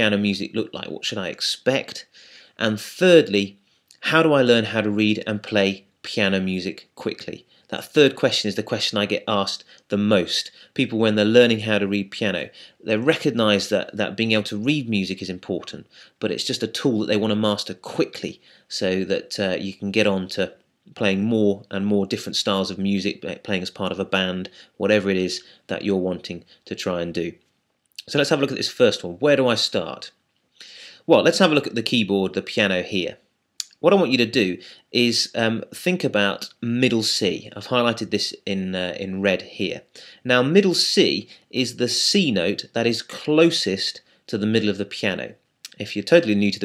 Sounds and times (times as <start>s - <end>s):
Speech: 0.0s - 27.4s, 28.0s - 30.2s, 31.0s - 46.6s.